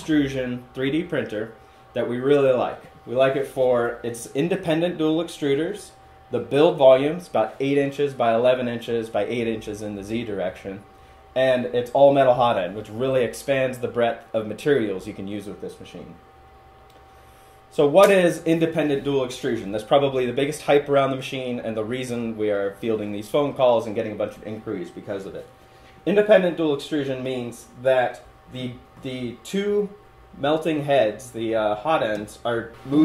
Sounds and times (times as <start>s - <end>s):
Speech: 0.0s - 16.2s, 17.7s - 33.0s.